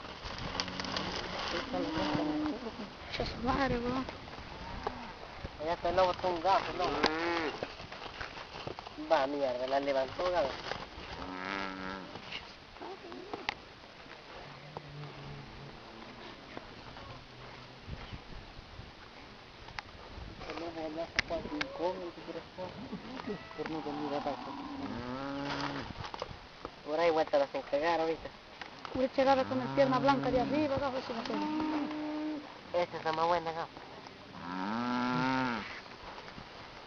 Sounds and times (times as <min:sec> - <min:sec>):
Livestock, farm animals, working animals: 0:00.0 - 0:18.3, 0:20.0 - 0:26.2, 0:28.9 - 0:36.8
Speech: 0:29.0 - 0:31.4.